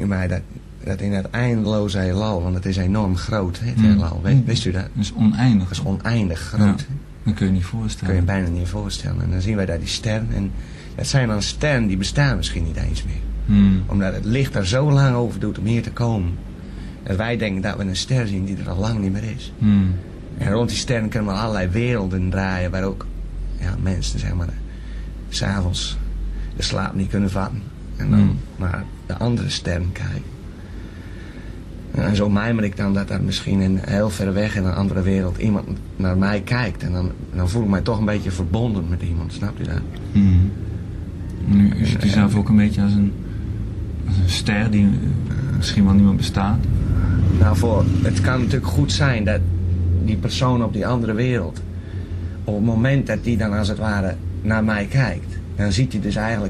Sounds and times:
Speech: 0.0 - 16.4, 17.0 - 24.6, 25.3 - 26.0, 26.6 - 30.3, 31.9 - 40.6, 41.4 - 43.2, 44.0 - 51.6, 52.5 - 56.5.

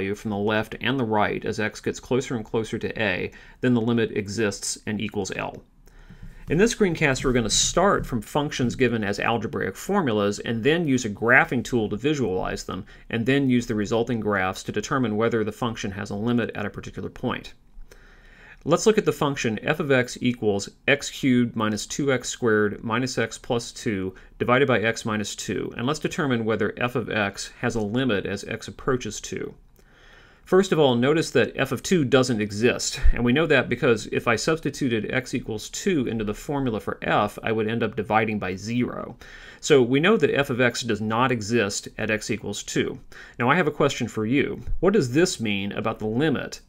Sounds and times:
Speech: 0.0 - 5.7, 6.5 - 17.6, 18.6 - 29.6, 30.5 - 46.6.

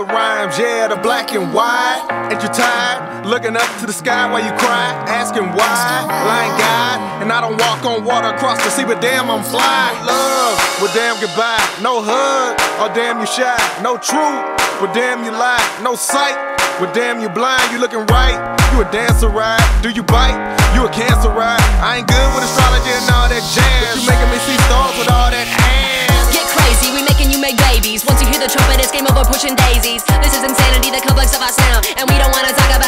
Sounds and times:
Music: 0.0 - 32.8.

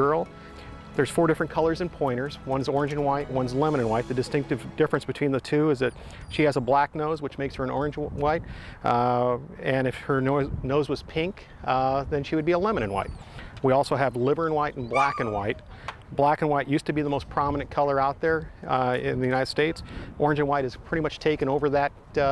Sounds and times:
Speech: 1.0 - 22.3
Yip: 14.9 - 15.6.

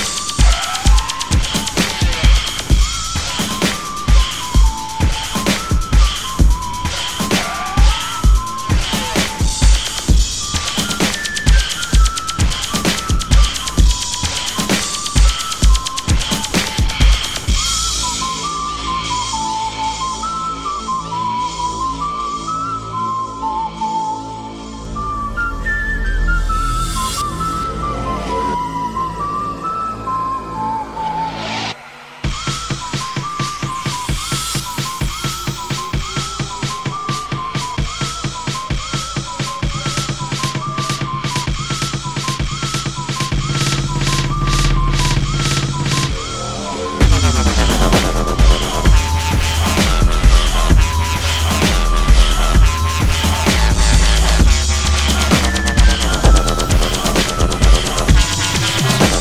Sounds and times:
Dubstep: 0.0 - 20.4, 31.3 - 59.2.

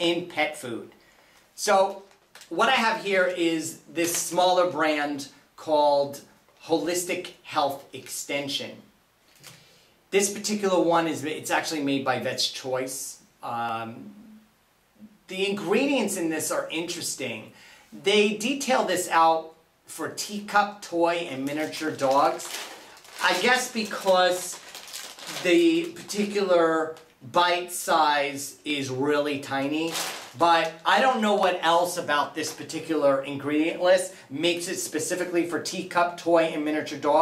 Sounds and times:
Speech: 0.0 - 1.0, 1.6 - 8.9, 10.1 - 14.4, 15.0 - 22.6, 23.2 - 37.2.

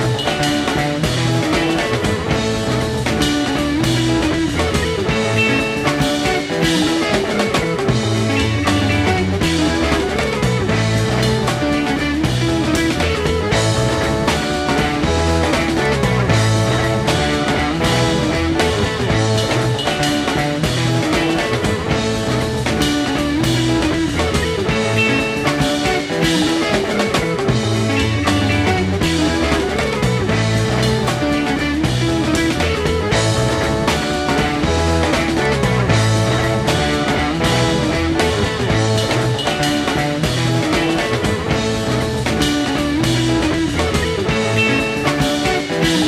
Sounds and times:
Rock music: 0.0 - 46.0.

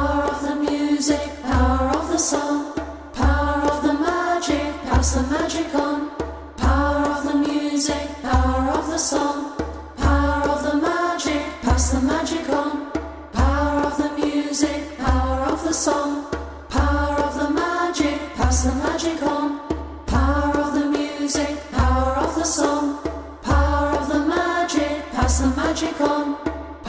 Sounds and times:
Music: 0.0 - 26.8.

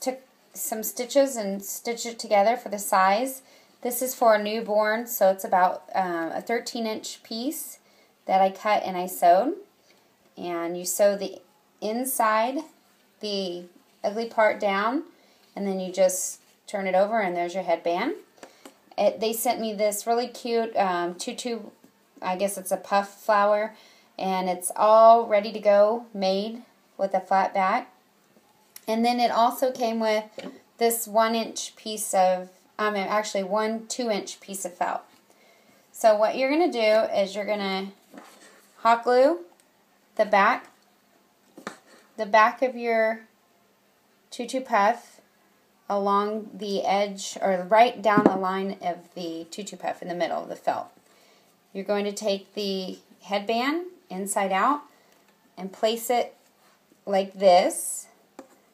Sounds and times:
Speech: 0.0 - 9.7, 10.4 - 18.2, 19.0 - 27.9, 28.8 - 35.1, 36.0 - 38.0, 38.8 - 39.5, 40.2 - 40.8, 42.2 - 43.3, 44.3 - 45.2, 45.9 - 51.0, 51.7 - 54.9, 55.6 - 56.4, 57.1 - 58.2.

